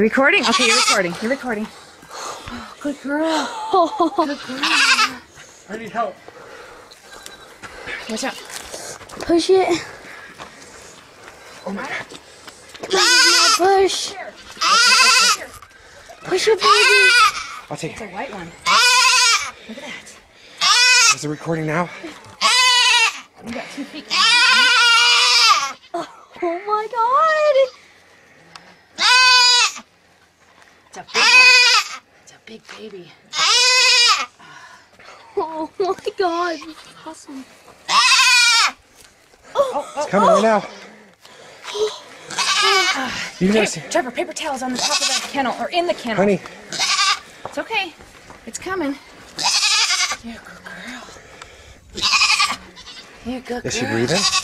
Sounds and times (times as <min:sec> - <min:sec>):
Bleat: 0:00.4 - 0:01.2, 0:04.2 - 0:05.2, 0:12.8 - 0:15.6, 0:16.3 - 0:17.7, 0:18.6 - 0:19.6, 0:20.6 - 0:21.2, 0:22.4 - 0:23.3, 0:24.0 - 0:26.1, 0:29.0 - 0:29.9, 0:31.0 - 0:32.0, 0:33.3 - 0:34.3, 0:37.9 - 0:38.8, 0:41.6 - 0:43.4, 0:44.7 - 0:45.4, 0:46.7 - 0:47.3, 0:49.4 - 0:50.3, 0:52.0 - 0:54.4.